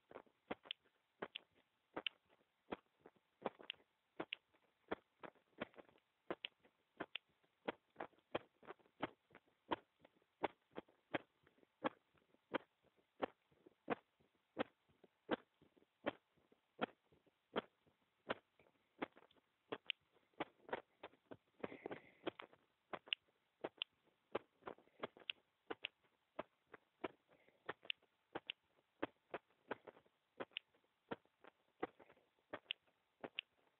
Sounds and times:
Heart sounds, heartbeat: 0.0s - 33.6s.

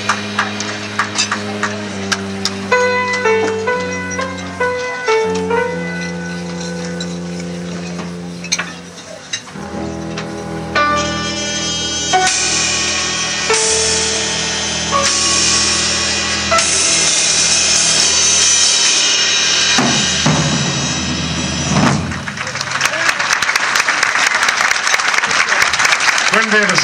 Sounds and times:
Applause: 0.0s - 1.8s, 22.0s - 26.8s
Music: 0.0s - 24.8s.

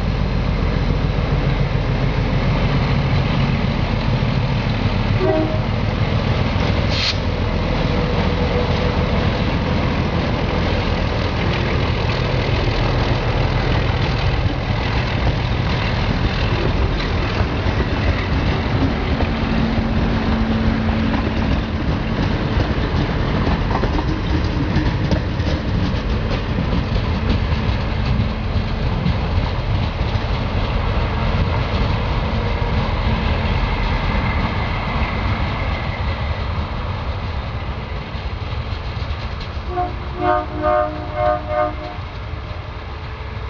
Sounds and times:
Outside, urban or manmade: 0.0s - 43.4s
Railroad car, train wagon: 0.0s - 43.4s
Train horn: 5.2s - 5.8s, 39.7s - 42.2s.

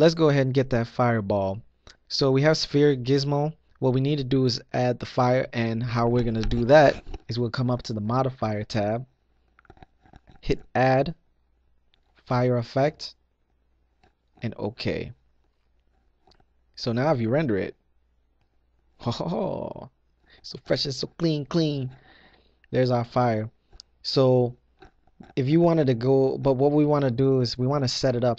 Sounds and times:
Speech: 0.0s - 9.1s, 10.4s - 11.2s, 12.3s - 13.2s, 14.4s - 15.2s, 16.8s - 17.8s, 19.0s - 22.0s, 22.7s - 24.6s, 25.2s - 28.3s.

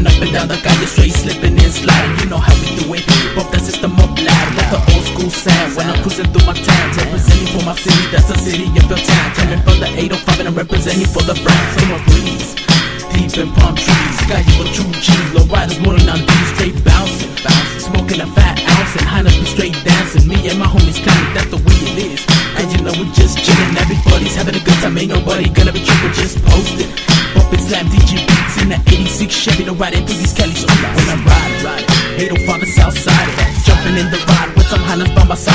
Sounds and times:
Music: 0.0s - 35.5s.

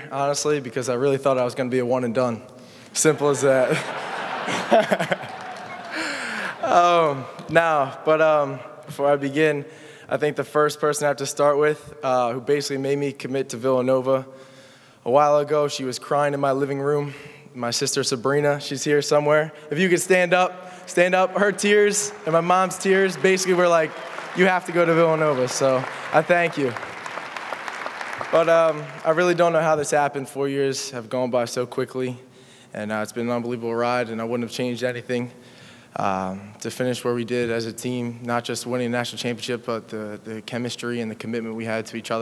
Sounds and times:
Male speech, man speaking: 0.0s - 3.8s, 6.6s - 14.3s, 15.1s - 26.8s, 28.3s - 32.2s, 32.8s - 35.4s, 36.0s - 42.2s.

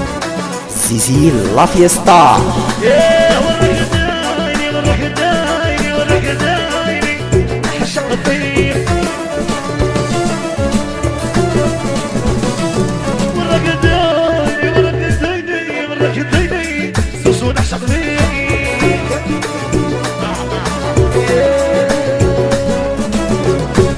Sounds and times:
Music: 0.0s - 23.9s.

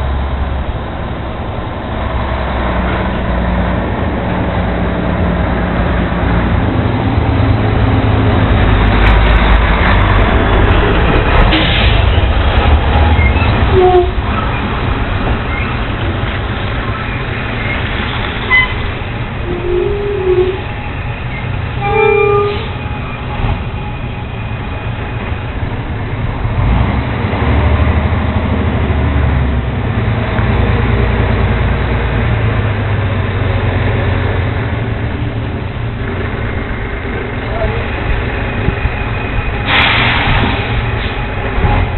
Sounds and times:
Truck: 0.0s - 41.9s.

